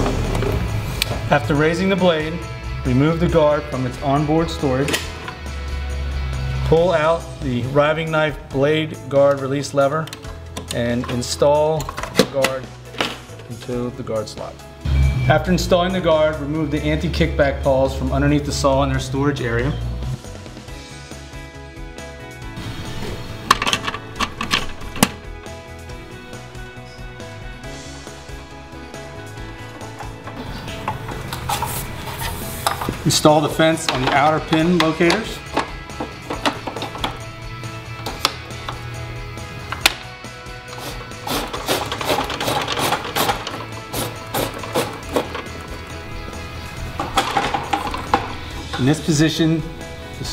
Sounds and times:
Music: 0:00.0 - 0:50.3
Tools: 0:40.7 - 0:45.5.

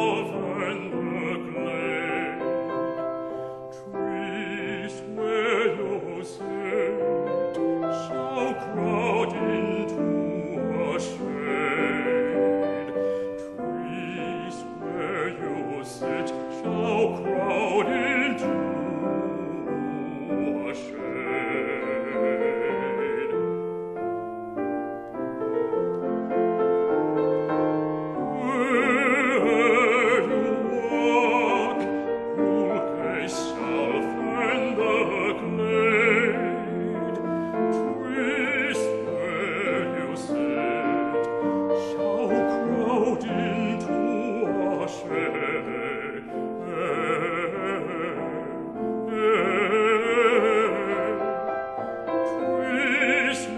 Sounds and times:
Music: 0:00.0 - 0:53.5.

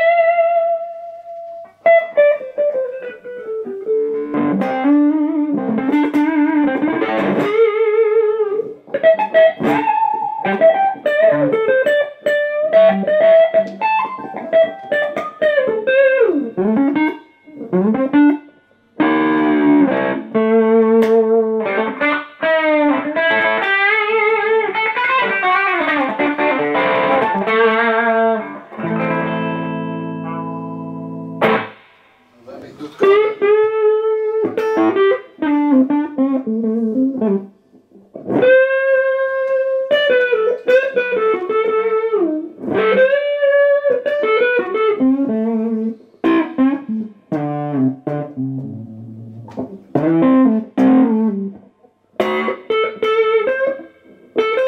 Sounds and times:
Electric guitar: 0:00.0 - 0:54.6
Speech: 0:32.4 - 0:33.1.

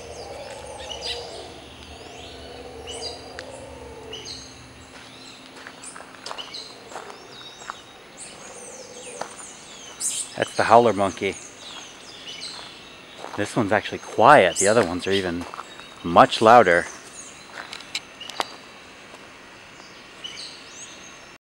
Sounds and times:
Speech: 0:10.4 - 0:11.4, 0:13.4 - 0:17.0.

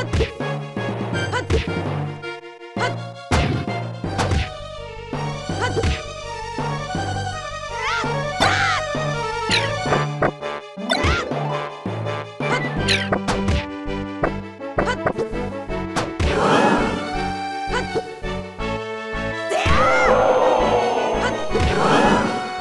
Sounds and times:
Music: 0:00.0 - 0:22.6.

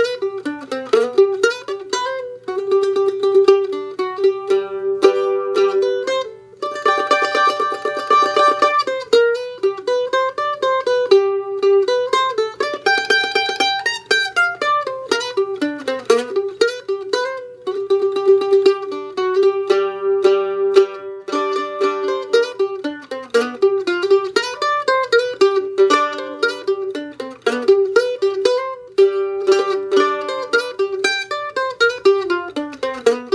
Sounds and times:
Mandolin: 0:00.0 - 0:33.3.

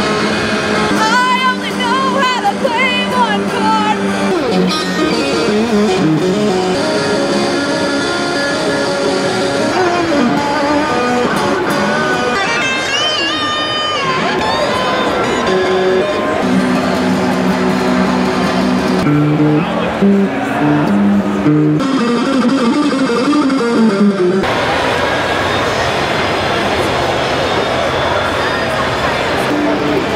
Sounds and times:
Electric guitar: 0:00.0 - 0:30.1.

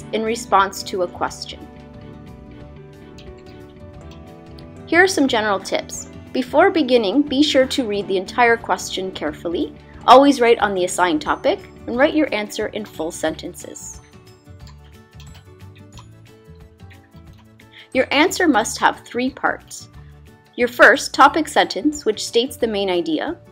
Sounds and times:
Speech: 0:00.0 - 0:01.7, 0:04.9 - 0:14.0, 0:17.9 - 0:19.9, 0:20.6 - 0:23.4
Music: 0:00.0 - 0:23.5.

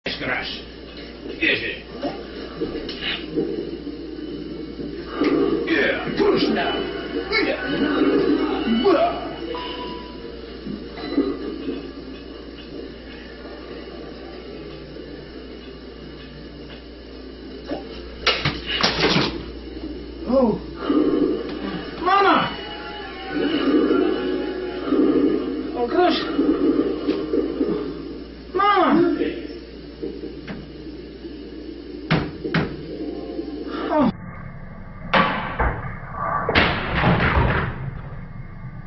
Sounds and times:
Television: 0:00.0 - 0:38.8
Music: 0:06.4 - 0:35.6.

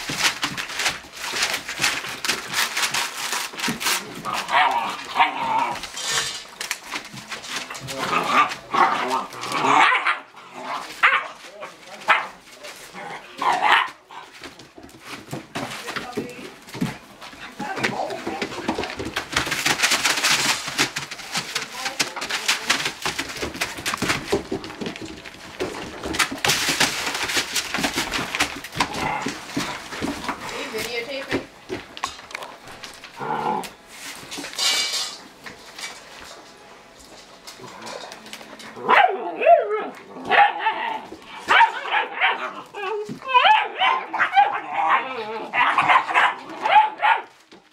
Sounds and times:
Inside, small room: 0:00.0 - 0:47.7
Canidae, dogs, wolves: 0:03.9 - 0:06.0, 0:06.9 - 0:14.8, 0:37.5 - 0:47.6
Bow-wow: 0:04.4 - 0:05.8, 0:08.0 - 0:11.4, 0:12.1 - 0:12.4, 0:13.4 - 0:14.0, 0:38.8 - 0:47.3
Yip: 0:38.9 - 0:42.5, 0:45.6 - 0:47.3.

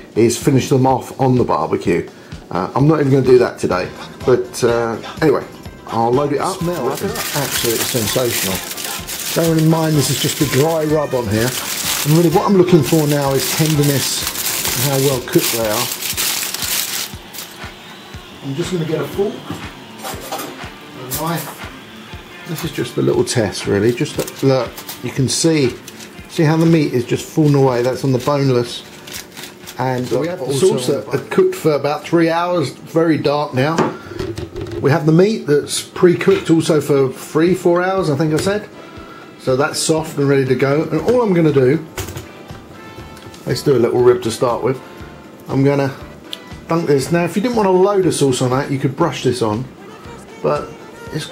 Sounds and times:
Speech: 0:00.0 - 0:08.7, 0:09.3 - 0:15.9, 0:18.4 - 0:21.7, 0:22.4 - 0:28.9, 0:29.8 - 0:33.9, 0:34.8 - 0:38.7, 0:39.4 - 0:41.9, 0:43.4 - 0:44.8, 0:45.5 - 0:46.0, 0:46.7 - 0:49.7, 0:50.4 - 0:51.3
Music: 0:00.0 - 0:51.3.

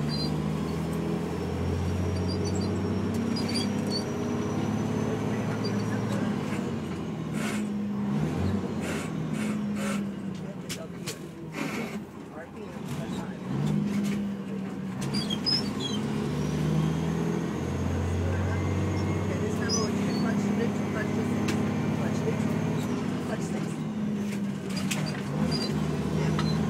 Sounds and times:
Truck: 0:00.0 - 0:26.7
Speech: 0:05.0 - 0:06.5, 0:10.4 - 0:11.4, 0:12.3 - 0:13.5, 0:18.1 - 0:23.8.

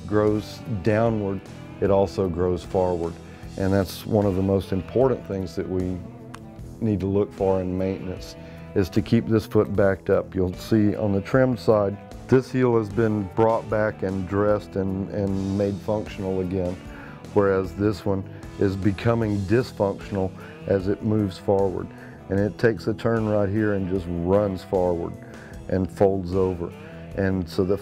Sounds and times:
Speech: 0:00.0 - 0:06.1, 0:06.8 - 0:27.8
Music: 0:00.0 - 0:27.8.

